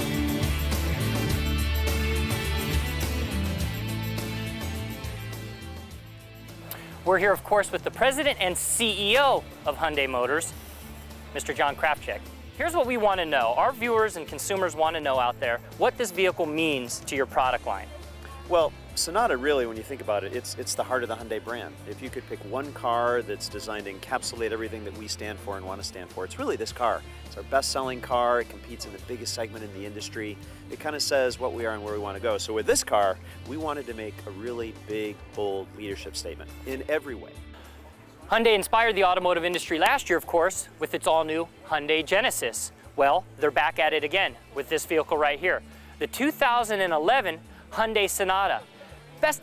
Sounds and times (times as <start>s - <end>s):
Music: 0.0s - 49.4s
Speech: 7.0s - 10.5s, 11.3s - 37.4s, 38.3s - 48.6s, 49.2s - 49.4s.